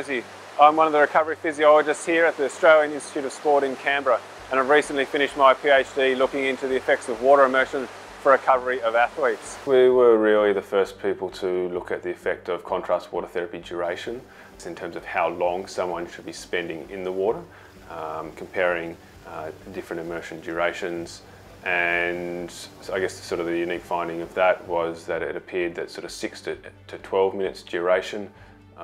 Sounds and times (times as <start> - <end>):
Music: 0.0 - 28.8
Speech: 0.0 - 28.8.